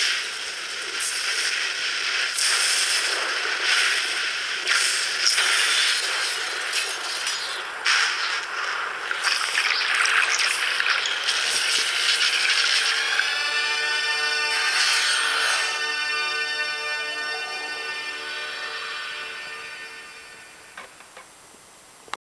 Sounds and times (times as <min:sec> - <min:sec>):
Music: 0:09.1 - 0:21.2.